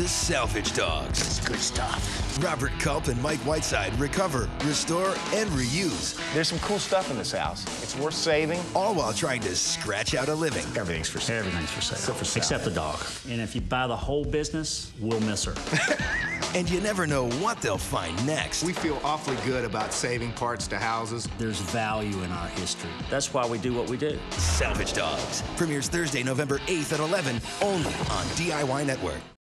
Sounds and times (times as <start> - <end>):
Music: 0.0 - 29.4
Speech: 0.1 - 15.6, 16.6 - 29.3.